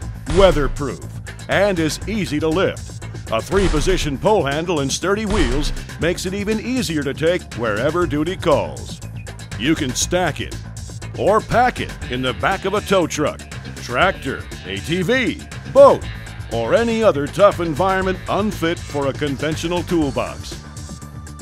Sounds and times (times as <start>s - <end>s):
Music: 0.0s - 21.4s
Speech: 0.3s - 9.0s, 9.6s - 10.6s, 11.2s - 20.6s.